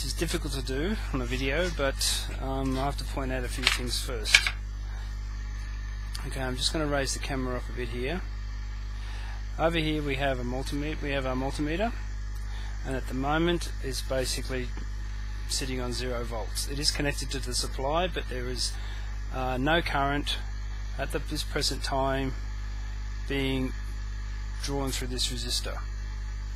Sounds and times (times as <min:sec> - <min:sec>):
Speech: 0:00.0 - 0:04.5, 0:06.2 - 0:08.3, 0:09.6 - 0:12.0, 0:12.8 - 0:14.8, 0:15.5 - 0:22.4, 0:23.3 - 0:23.8, 0:24.6 - 0:25.9.